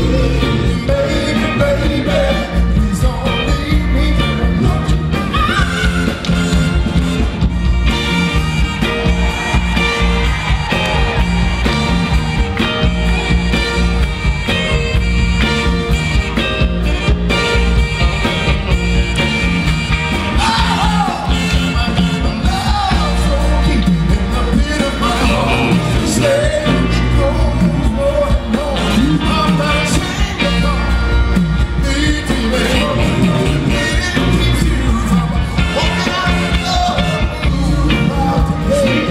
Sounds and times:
Music: 0:00.0 - 0:39.1.

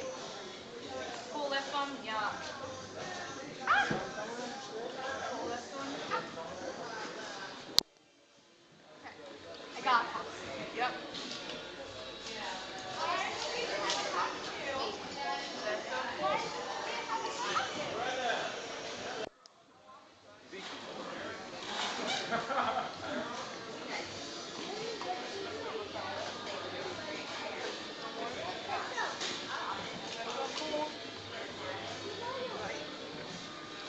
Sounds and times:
Music: 0:00.0 - 0:07.8, 0:20.6 - 0:33.8.

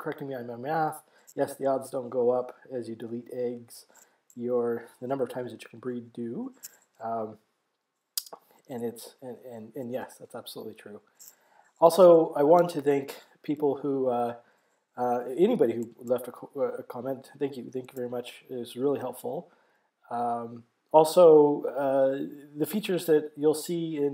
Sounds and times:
Speech: 0:00.0 - 0:07.4, 0:08.2 - 0:11.1, 0:11.8 - 0:14.4, 0:15.0 - 0:19.5, 0:20.1 - 0:24.1.

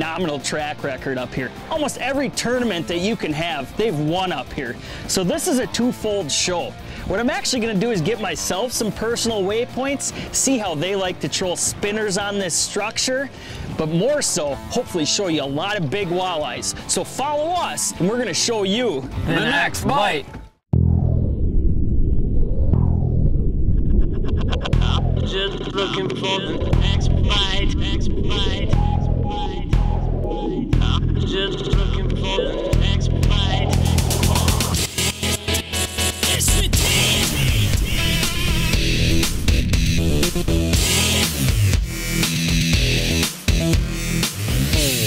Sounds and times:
Speech: 0:00.0 - 0:20.3
Music: 0:00.0 - 0:20.7, 0:24.7 - 0:45.0.

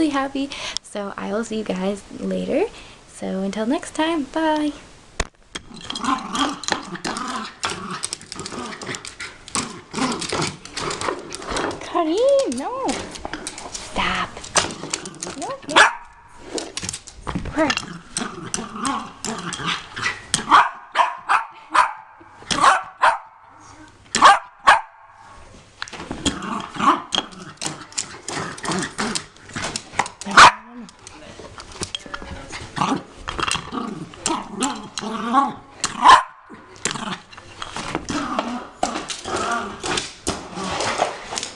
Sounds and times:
Growling: 0:05.7 - 0:11.8, 0:13.2 - 0:15.8, 0:17.6 - 0:20.5, 0:26.2 - 0:31.0, 0:32.6 - 0:37.3, 0:38.0 - 0:41.0.

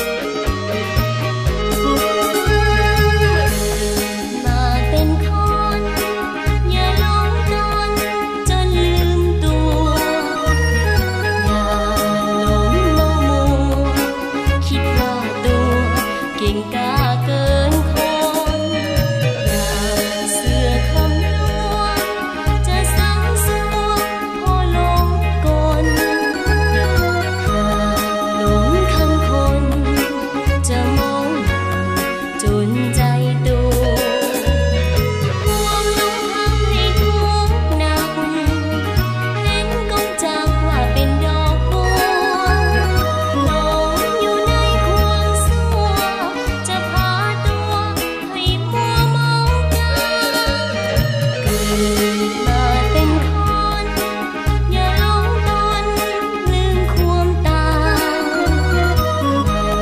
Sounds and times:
Music: 0:00.0 - 0:59.8
Outside, urban or manmade: 0:00.0 - 0:59.8.

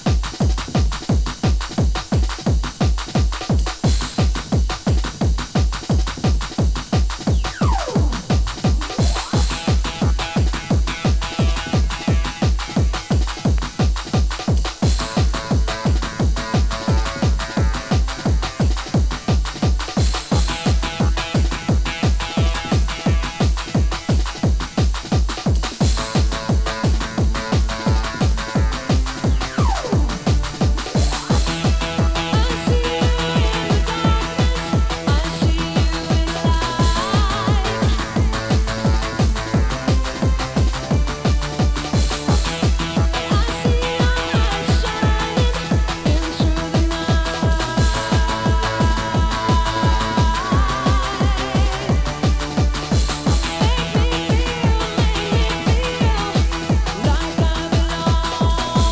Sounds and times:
Music: 0:00.0 - 0:58.9.

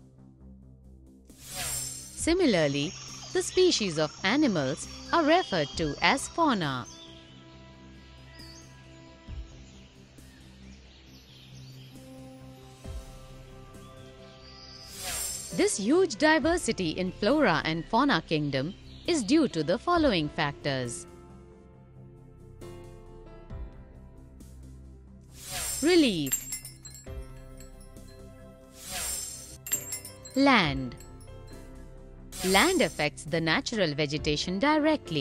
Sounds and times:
Music: 0:00.0 - 0:35.2
Speech: 0:02.2 - 0:06.9, 0:15.6 - 0:21.0, 0:25.8 - 0:26.3, 0:30.4 - 0:31.0, 0:32.4 - 0:35.2.

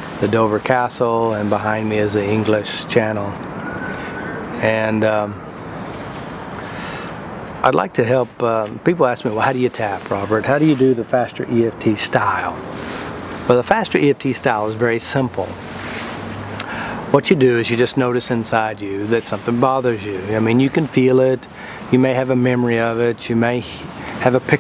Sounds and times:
Speech: 0:00.2 - 0:03.4, 0:04.6 - 0:05.4, 0:07.6 - 0:12.6, 0:13.5 - 0:15.6, 0:17.1 - 0:24.6.

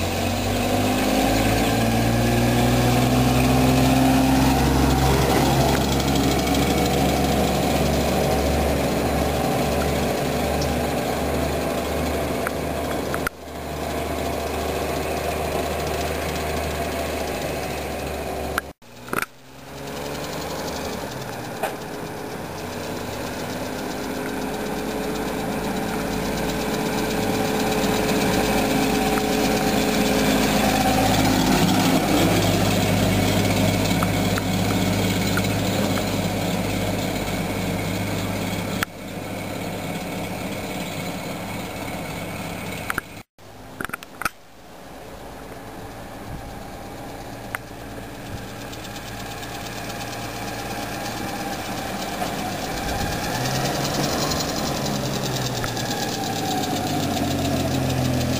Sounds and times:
Truck: 0:00.0 - 0:58.3.

